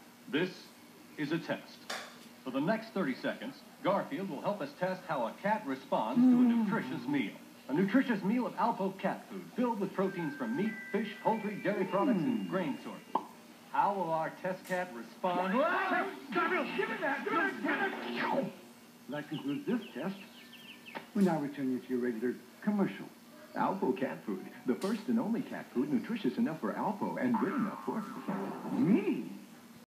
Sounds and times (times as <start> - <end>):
Speech: 0.3 - 1.8, 2.5 - 13.1, 13.7 - 18.5, 19.1 - 20.2, 21.1 - 28.1.